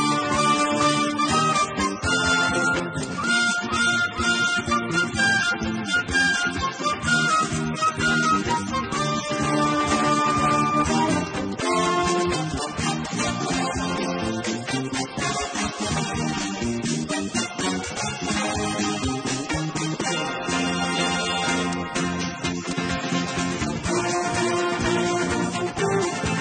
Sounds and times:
Music: 0:00.0 - 0:26.4.

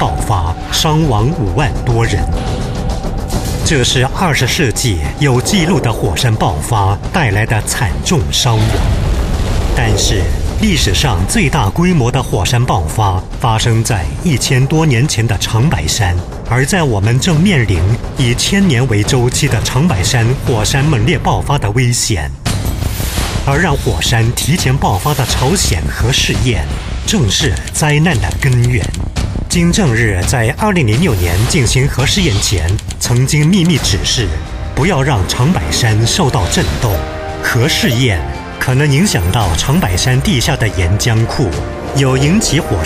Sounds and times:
Speech: 0:00.0 - 0:02.4, 0:03.6 - 0:09.0, 0:09.7 - 0:22.4, 0:23.5 - 0:42.8
Music: 0:00.0 - 0:42.8.

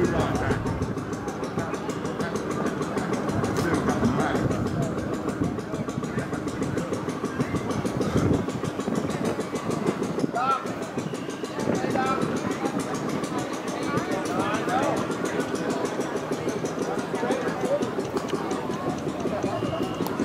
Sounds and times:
Wind noise (microphone): 0:04.0 - 0:10.4.

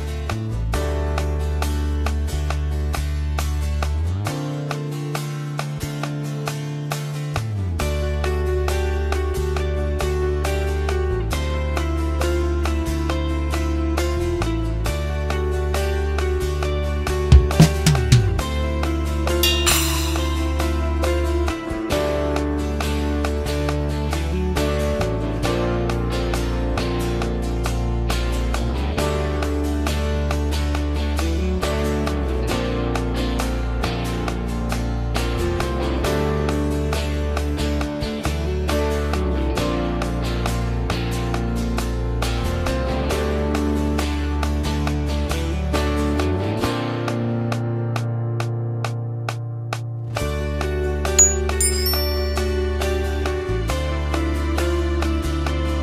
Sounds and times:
Music: 0:00.0 - 0:55.8.

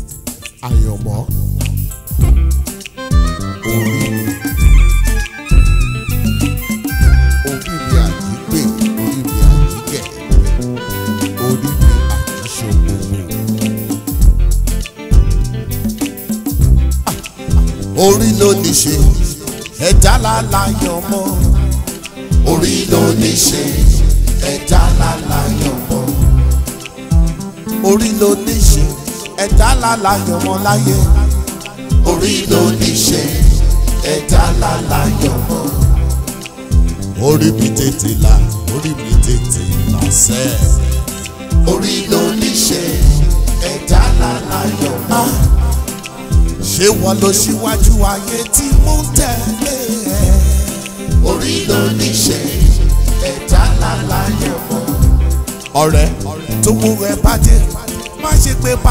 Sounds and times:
Afrobeat: 0:00.0 - 0:58.9
Reggae: 0:00.0 - 0:58.9.

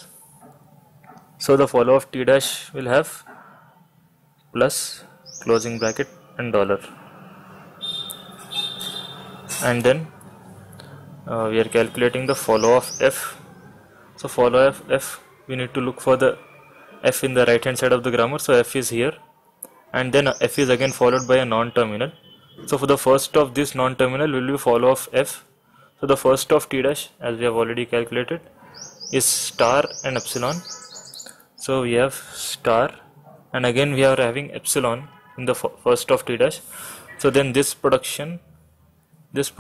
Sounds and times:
Speech: 0:01.4 - 0:03.3, 0:04.6 - 0:06.9, 0:09.5 - 0:10.1, 0:11.3 - 0:13.4, 0:14.2 - 0:16.4, 0:19.9 - 0:28.4, 0:29.2 - 0:30.6, 0:31.6 - 0:33.0, 0:33.6 - 0:36.6, 0:37.2 - 0:38.4, 0:39.4 - 0:39.6.

